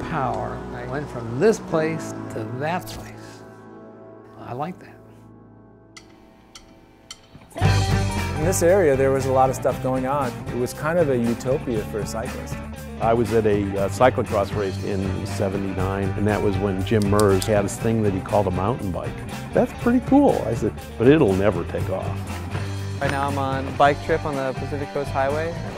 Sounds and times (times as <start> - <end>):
Speech: 0.0 - 3.2, 4.4 - 5.0, 8.4 - 22.2, 23.0 - 25.7
Music: 0.0 - 25.7.